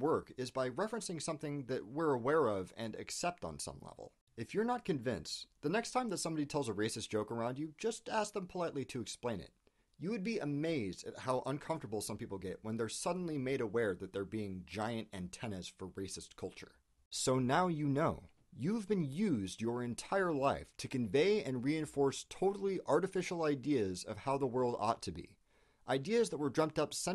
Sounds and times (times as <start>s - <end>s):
Speech: 0.0s - 27.1s.